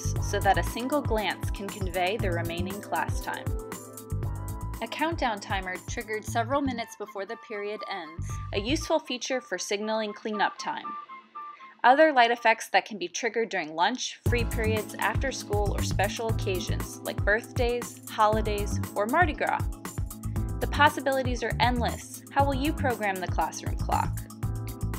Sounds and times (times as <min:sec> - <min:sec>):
Speech: 0:00.0 - 0:03.5, 0:04.8 - 0:10.9, 0:11.8 - 0:19.7, 0:20.6 - 0:24.2
Music: 0:00.0 - 0:12.8, 0:14.2 - 0:24.9.